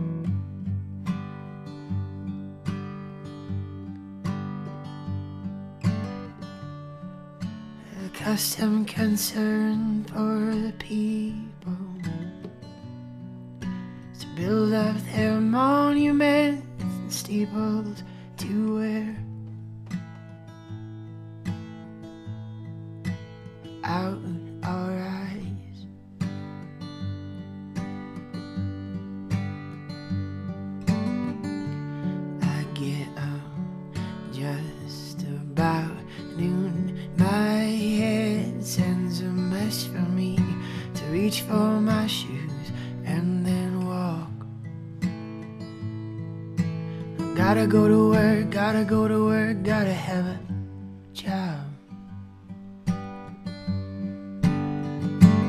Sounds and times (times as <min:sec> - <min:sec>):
Music: 0:00.0 - 0:55.4.